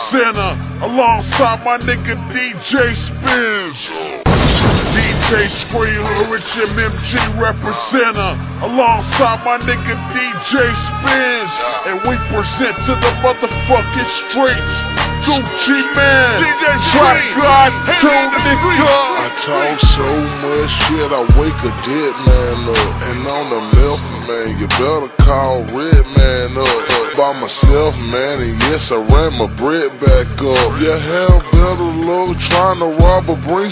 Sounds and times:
Music: 0.0s - 33.7s
Speech: 5.0s - 33.7s.

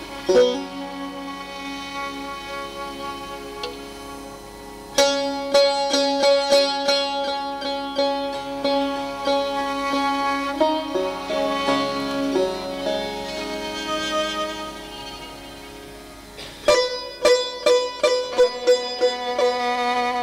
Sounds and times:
Sitar: 0.0s - 20.2s.

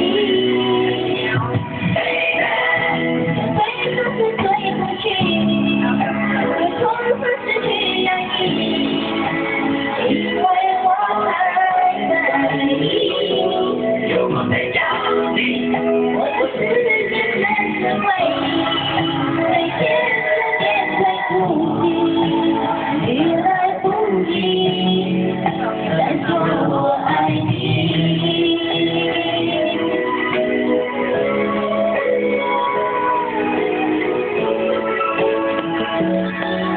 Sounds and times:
Female singing: 0.0s - 30.5s
Music: 0.0s - 36.7s.

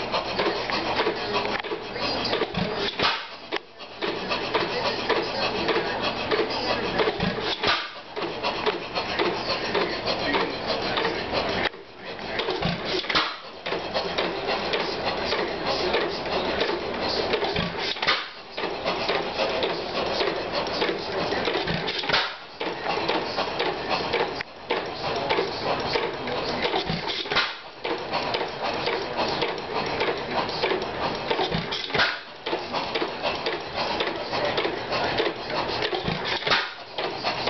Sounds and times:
Engine: 0.0s - 37.5s
Speech: 0.0s - 37.5s.

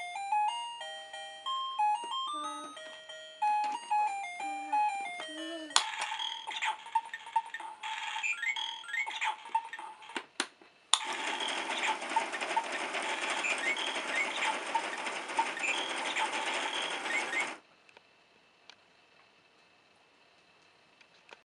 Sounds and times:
Gears: 11.0s - 17.6s
Ratchet, pawl: 11.0s - 17.6s.

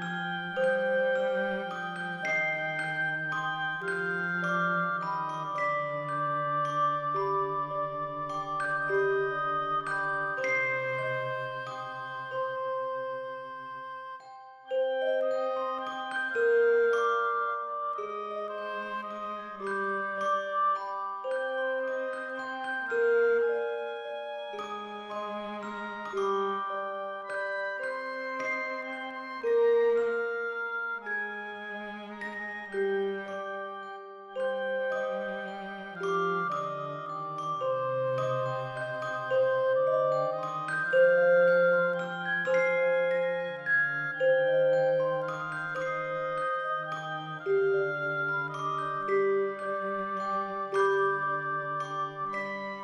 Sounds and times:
Music: 0.0s - 52.8s.

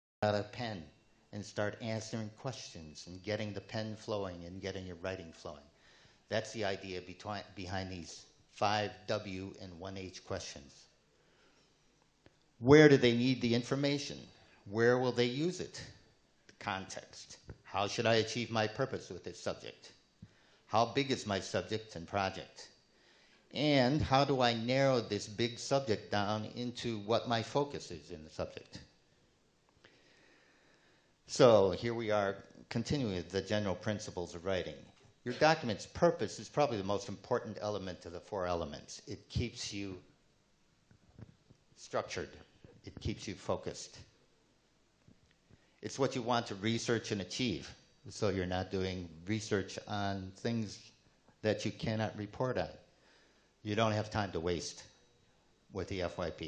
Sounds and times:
Speech: 0.2s - 5.7s, 6.3s - 10.9s, 12.6s - 16.0s, 16.6s - 20.0s, 20.7s - 22.8s, 23.5s - 28.9s, 31.3s - 40.1s, 41.8s - 44.2s, 45.8s - 52.8s, 53.7s - 54.9s, 55.7s - 56.4s.

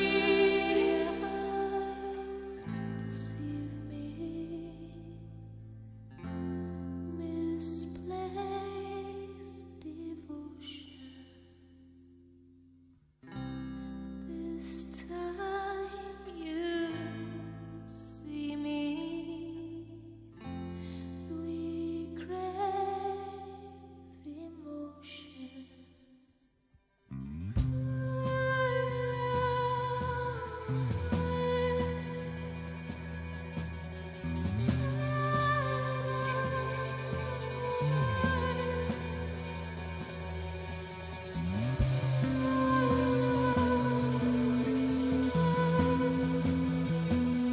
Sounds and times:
Music: 0.0s - 47.5s.

